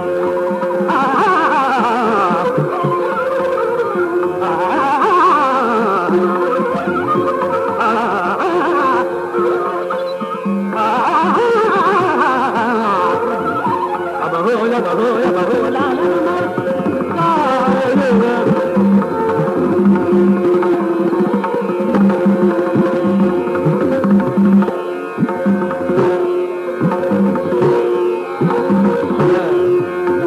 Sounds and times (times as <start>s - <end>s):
Tabla: 0.0s - 30.2s.